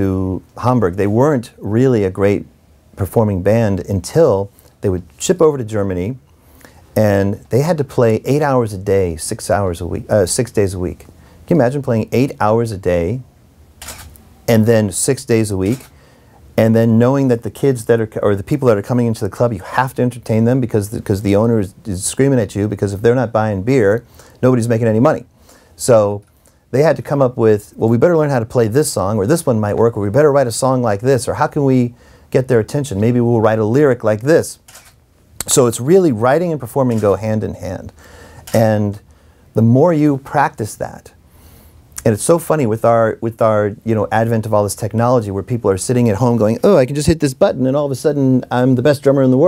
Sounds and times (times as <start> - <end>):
Speech: 0.0 - 6.2, 7.0 - 13.3, 14.5 - 15.9, 16.6 - 34.6, 35.4 - 39.0, 39.6 - 41.2, 42.0 - 49.4.